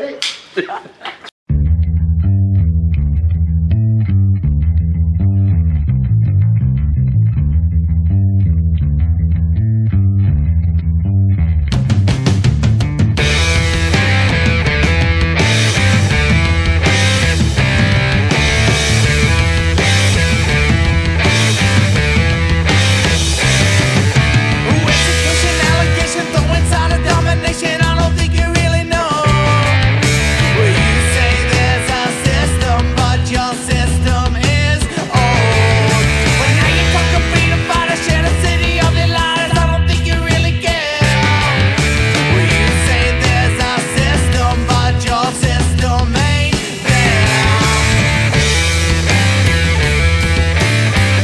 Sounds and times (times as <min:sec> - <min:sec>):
Progressive rock: 0:11.6 - 0:51.2.